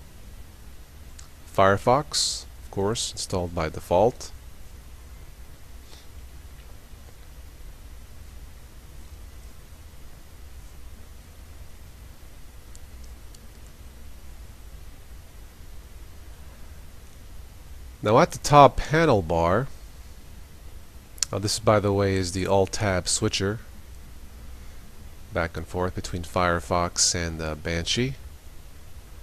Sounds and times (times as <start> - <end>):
Speech: 1.6 - 4.4, 18.0 - 19.7, 21.2 - 23.7, 25.4 - 28.2
Silence: 4.3 - 18.1.